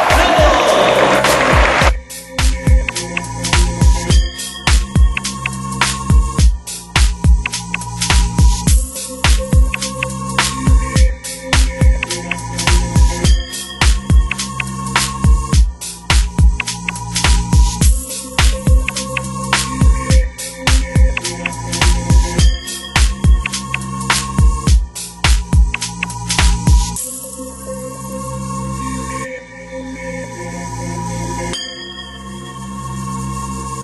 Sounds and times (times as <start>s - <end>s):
Music: 0.0s - 33.8s.